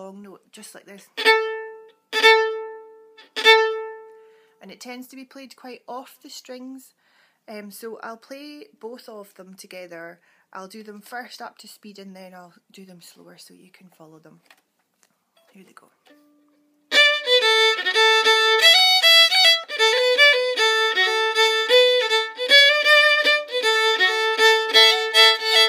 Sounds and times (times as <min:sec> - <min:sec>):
Speech: 0:00.0 - 0:01.2, 0:04.6 - 0:14.5, 0:15.5 - 0:16.1
Violin, fiddle: 0:01.2 - 0:04.2, 0:16.9 - 0:25.6.